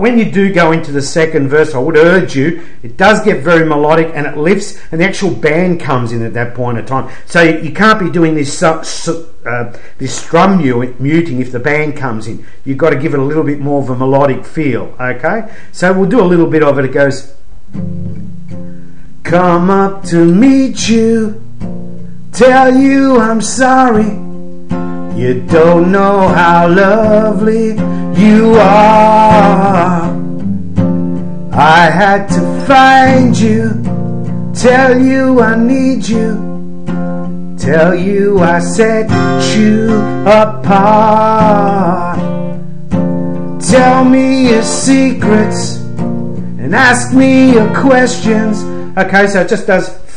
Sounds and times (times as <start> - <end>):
Acoustic guitar: 0.0 - 50.1
Strum: 17.4 - 49.3.